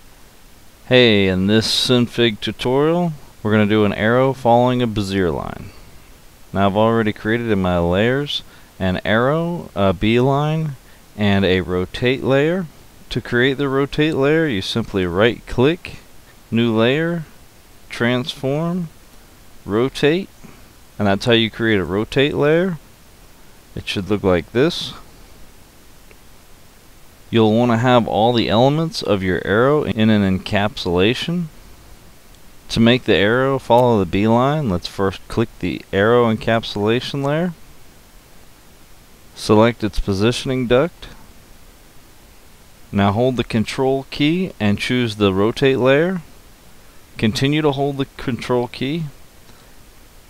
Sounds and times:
Speech: 0.9 - 5.8, 6.5 - 17.3, 17.9 - 19.0, 19.7 - 20.4, 21.0 - 22.8, 23.8 - 25.1, 27.3 - 31.5, 32.7 - 37.6, 39.4 - 41.2, 42.9 - 46.3, 47.2 - 49.2.

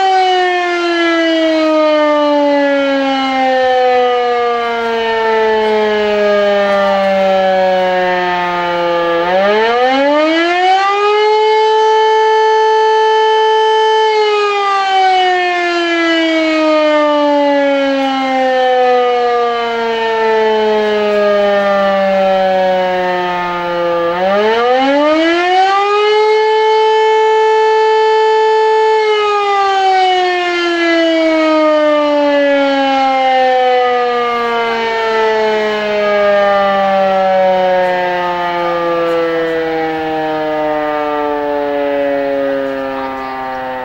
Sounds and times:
Civil defense siren: 0.0 - 43.8.

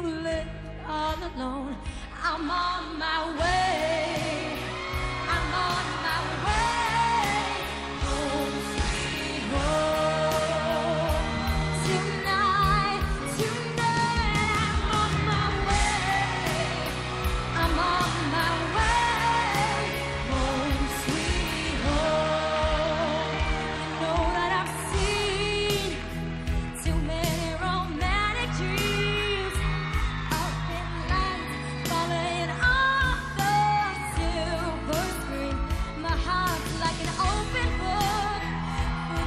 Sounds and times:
Singing: 0.0 - 26.2, 26.8 - 39.2
Pop music: 0.0 - 39.2.

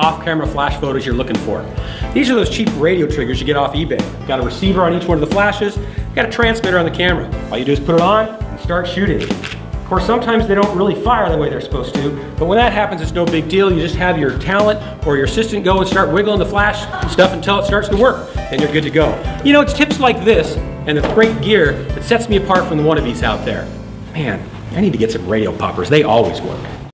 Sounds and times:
Speech: 0.0 - 9.3, 9.9 - 26.8
Music: 0.0 - 26.9.

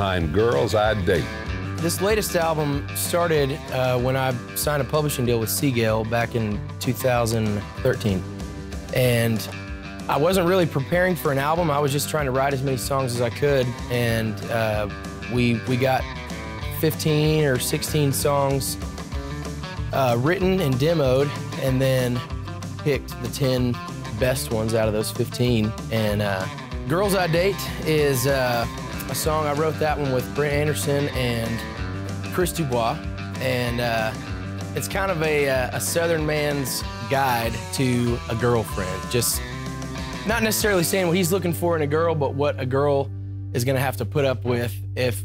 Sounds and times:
Speech: 0.0 - 8.3, 8.9 - 18.8, 19.9 - 39.4, 40.2 - 45.2
Music: 0.0 - 45.2.

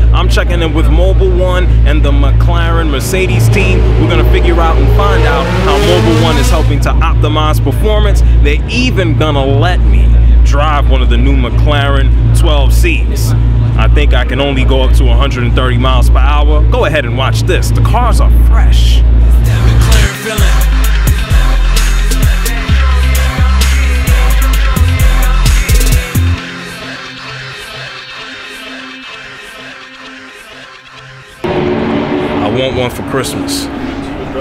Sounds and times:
Music: 0.0 - 11.6, 18.9 - 33.6
Speech: 0.0 - 19.0, 32.4 - 34.4.

